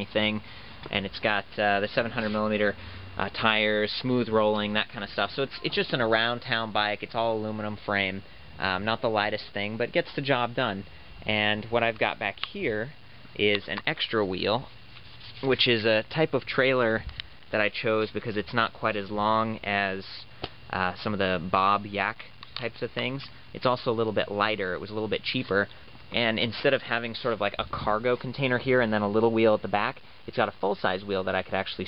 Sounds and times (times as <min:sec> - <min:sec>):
Speech: 0:00.0 - 0:14.7, 0:15.4 - 0:31.8.